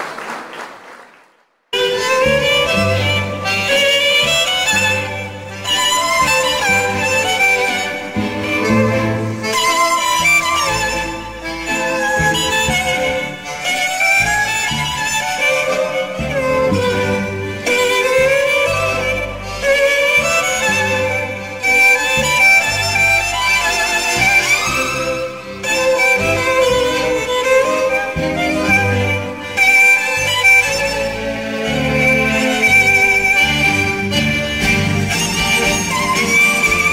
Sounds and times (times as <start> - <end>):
String section: 1.8 - 36.9
Violin, fiddle: 1.8 - 36.9.